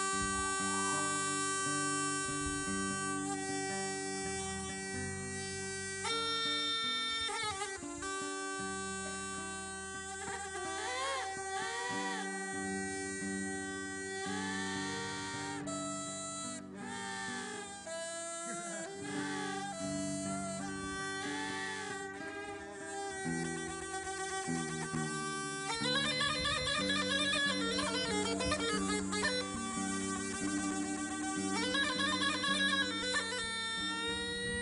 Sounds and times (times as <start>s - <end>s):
Bagpipes: 0.0s - 34.6s
Wind instrument, woodwind instrument: 0.0s - 34.6s.